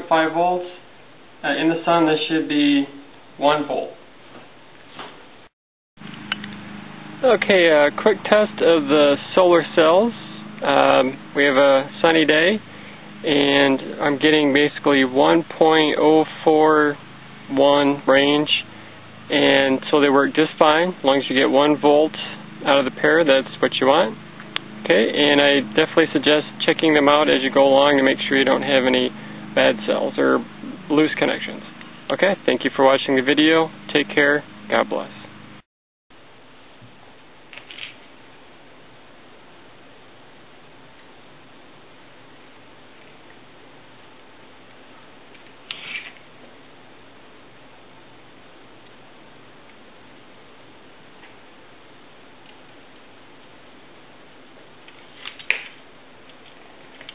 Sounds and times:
Speech: 0.0s - 4.0s, 7.2s - 12.6s, 13.2s - 18.7s, 19.3s - 24.2s, 24.8s - 35.3s.

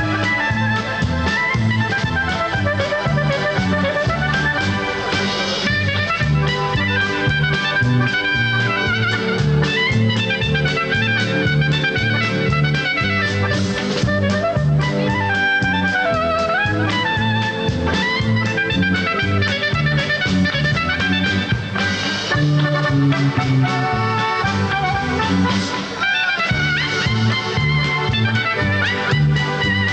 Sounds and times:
Clarinet: 0.0s - 29.9s
Orchestra: 0.0s - 29.9s.

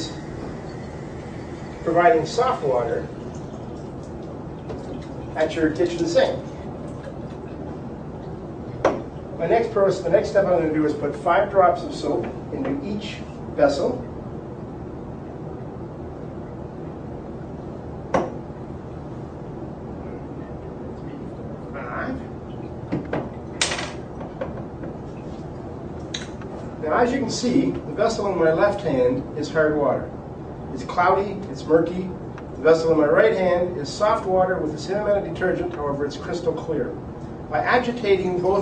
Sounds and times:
Speech: 1.8s - 3.1s, 5.4s - 6.5s, 9.4s - 14.1s, 21.8s - 22.3s, 26.8s - 30.1s, 30.7s - 38.6s.

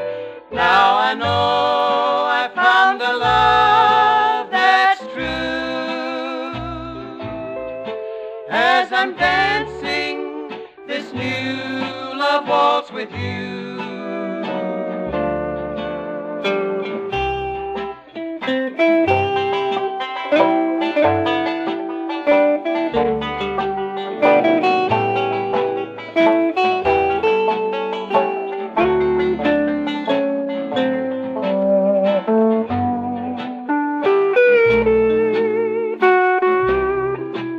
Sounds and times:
Plucked string instrument: 0.0s - 37.5s.

